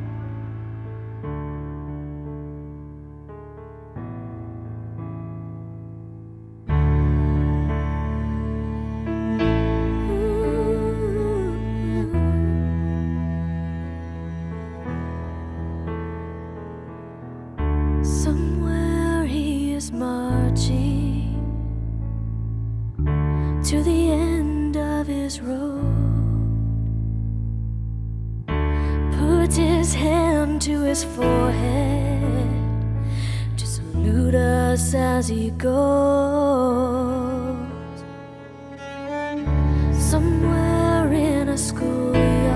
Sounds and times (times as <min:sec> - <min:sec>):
Cello: 0:00.0 - 0:03.1, 0:06.6 - 0:42.5.